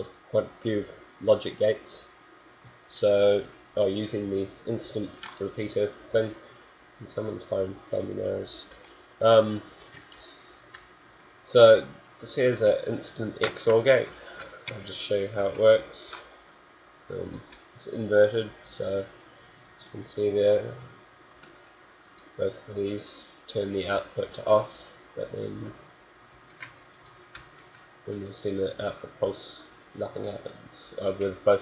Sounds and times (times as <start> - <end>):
Speech: 0.0 - 2.1, 2.9 - 6.4, 7.0 - 9.7, 11.5 - 16.3, 17.1 - 19.2, 19.8 - 21.0, 22.4 - 25.8, 28.1 - 31.6.